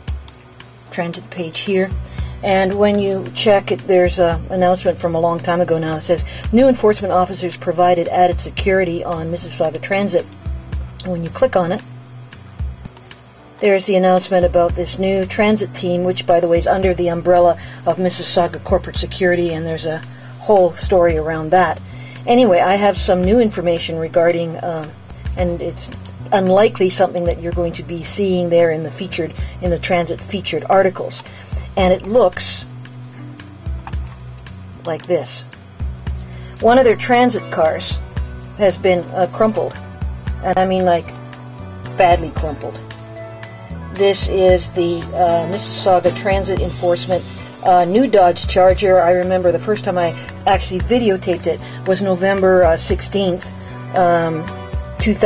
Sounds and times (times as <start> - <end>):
Music: 0.0 - 55.2
Speech: 0.9 - 10.3, 11.0 - 11.8, 13.6 - 32.7, 34.9 - 35.5, 36.6 - 38.0, 38.6 - 39.8, 40.4 - 41.1, 42.0 - 42.8, 44.0 - 55.2.